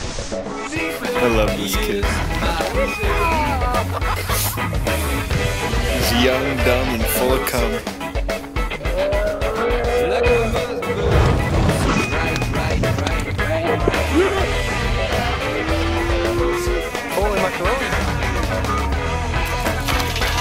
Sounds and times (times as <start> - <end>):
Music: 0.0 - 20.4
Speech: 1.0 - 3.7, 6.0 - 7.8, 17.1 - 18.0.